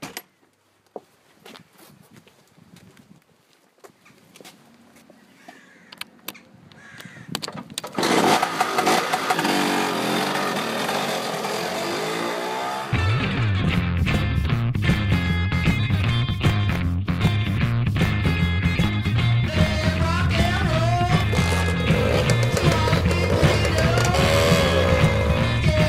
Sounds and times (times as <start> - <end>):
Outside, rural or natural: 0.0 - 13.6, 19.7 - 25.8
Motorcycle: 7.8 - 13.4, 19.7 - 25.8.